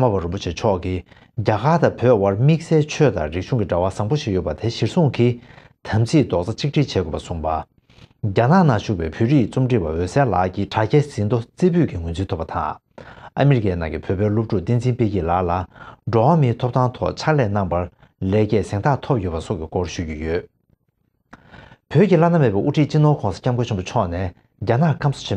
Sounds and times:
Speech: 0.0s - 12.8s, 13.4s - 20.5s, 21.9s - 25.3s.

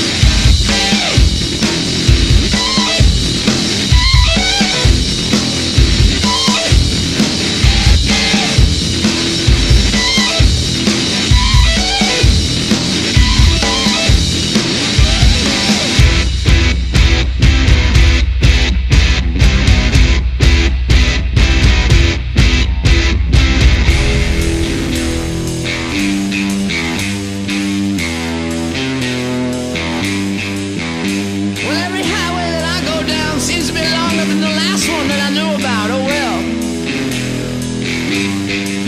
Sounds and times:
Music: 0.0s - 38.8s.

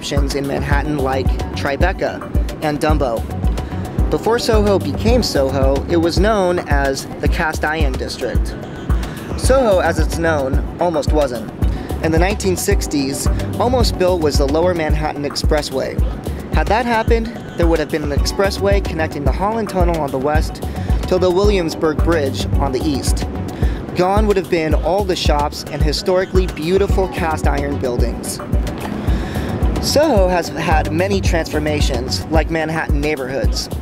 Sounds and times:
Speech: 0.0s - 3.2s, 4.1s - 8.6s, 9.4s - 23.2s, 23.9s - 28.4s, 29.8s - 33.8s
Music: 0.0s - 33.8s.

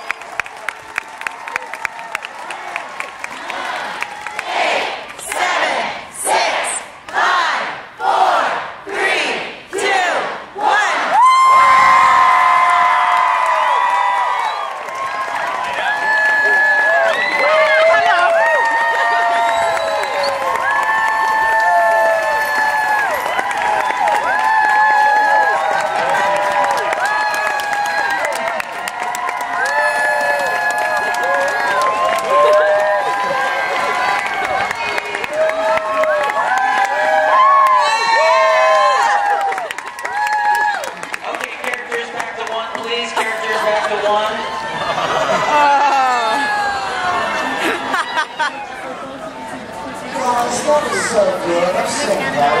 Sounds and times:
Outside, urban or manmade: 0.0s - 52.6s
Speech: 41.2s - 44.4s, 48.7s - 52.6s.

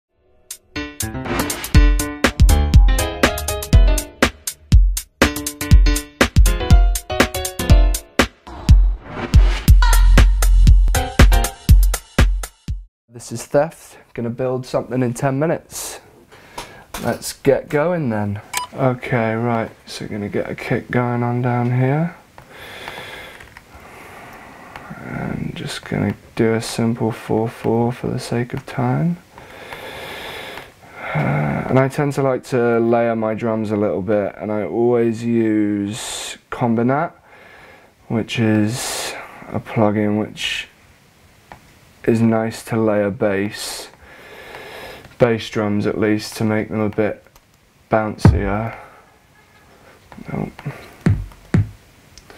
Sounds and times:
Music: 0.1s - 12.9s.

